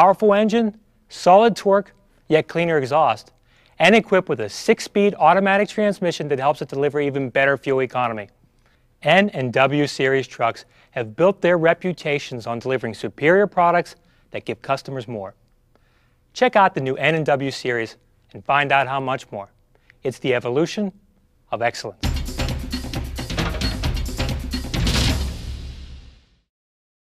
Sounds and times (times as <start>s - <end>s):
Speech: 0.0s - 8.4s, 9.0s - 15.4s, 16.4s - 22.0s
Music: 22.0s - 26.5s.